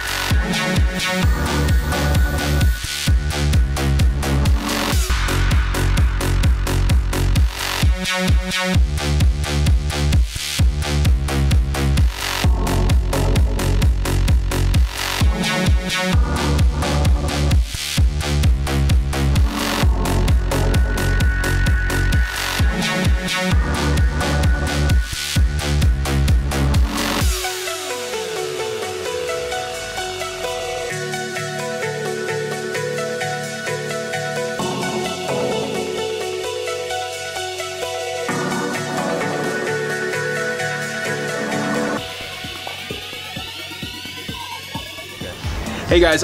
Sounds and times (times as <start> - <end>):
Music: 0.0 - 46.2.